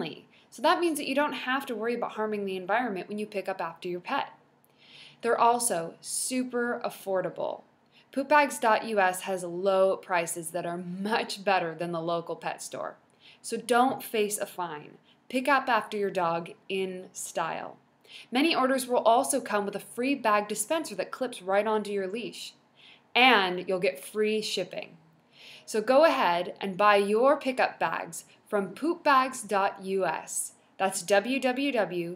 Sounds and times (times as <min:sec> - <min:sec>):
Speech: 0:00.0 - 0:04.4, 0:05.2 - 0:07.6, 0:08.2 - 0:22.6, 0:23.2 - 0:25.0, 0:25.7 - 0:32.1.